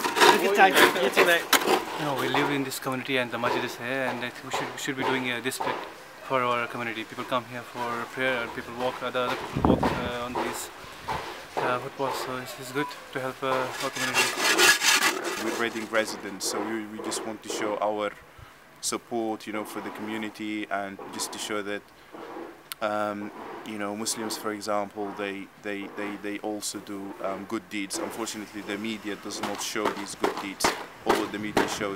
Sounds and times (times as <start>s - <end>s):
Outside, urban or manmade: 0.0s - 31.9s
Speech: 0.2s - 10.7s, 11.6s - 14.4s, 15.4s - 18.2s, 22.8s - 31.9s.